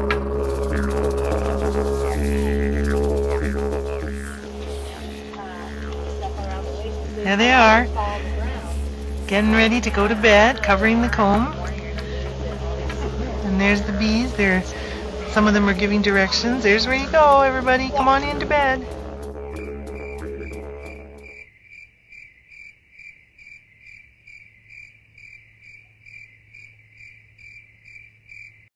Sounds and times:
Cricket: 19.6s - 28.7s.

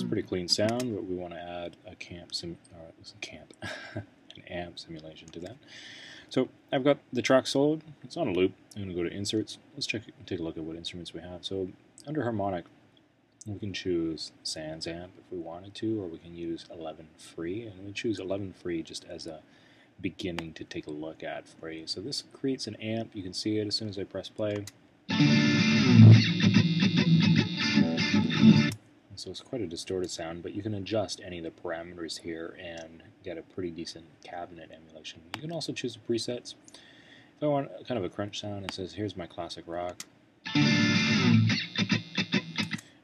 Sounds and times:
Guitar: 0.0s - 1.0s, 25.1s - 28.8s, 40.5s - 43.0s
Speech: 0.0s - 5.6s, 6.3s - 12.7s, 13.4s - 24.7s, 29.1s - 36.6s, 37.4s - 40.0s.

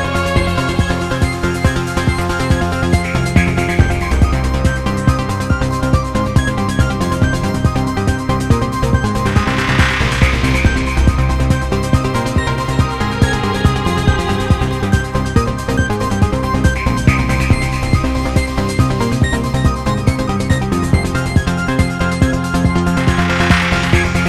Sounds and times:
Music: 0.0s - 24.2s.

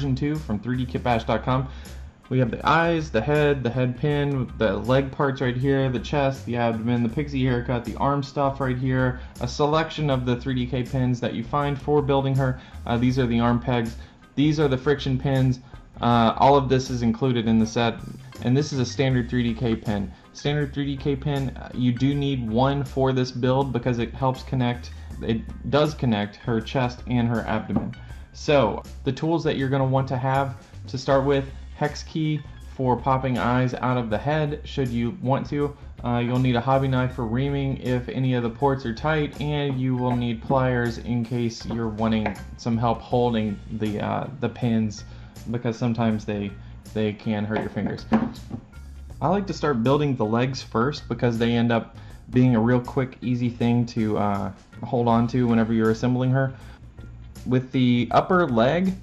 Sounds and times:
Speech: 0.0s - 48.4s, 49.2s - 56.6s, 57.4s - 59.0s
Music: 0.0s - 59.0s.

